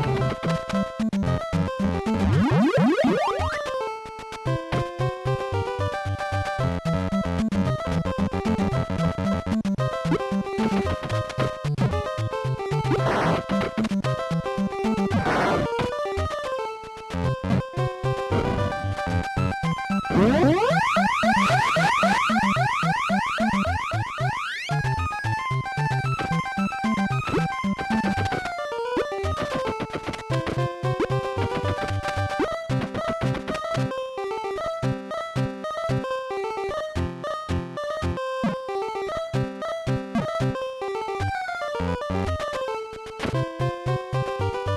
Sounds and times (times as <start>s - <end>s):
Music: 0.0s - 44.7s.